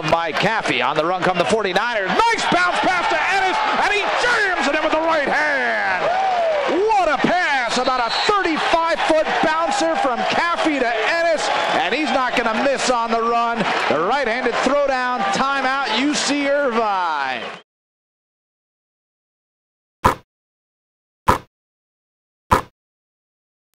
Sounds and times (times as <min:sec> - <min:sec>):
Speech: 0:00.0 - 0:06.0, 0:06.7 - 0:17.5.